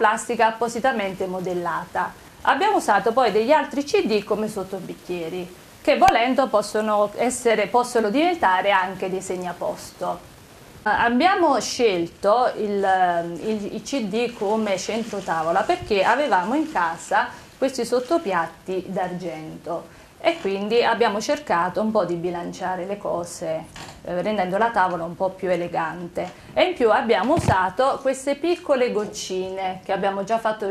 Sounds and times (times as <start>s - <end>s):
Female speech, woman speaking: 0.0s - 10.2s, 10.9s - 30.7s.